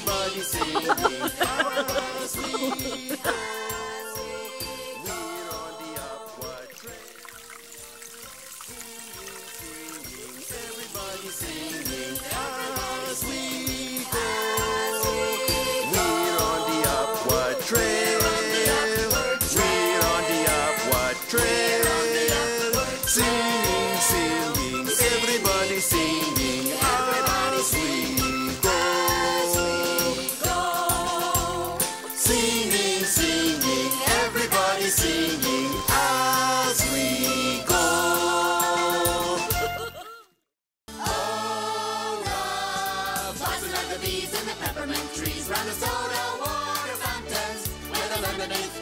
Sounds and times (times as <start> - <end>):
Jingle (music): 0.0 - 48.8.